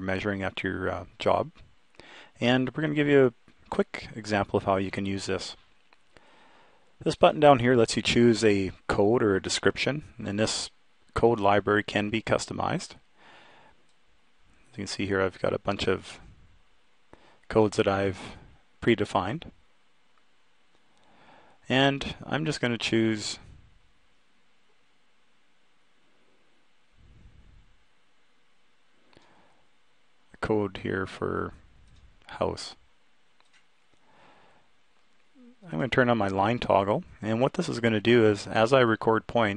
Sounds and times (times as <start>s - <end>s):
Speech: 0.0s - 1.6s, 2.4s - 5.6s, 7.0s - 13.0s, 14.7s - 16.3s, 17.5s - 19.6s, 21.7s - 23.6s, 30.3s - 31.6s, 32.2s - 32.8s, 35.4s - 39.5s.